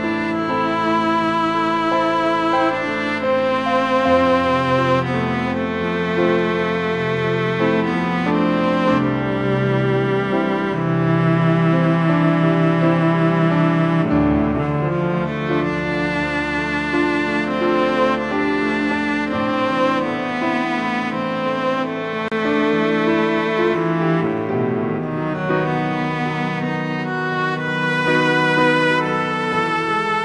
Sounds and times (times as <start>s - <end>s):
Cello: 0.0s - 30.2s.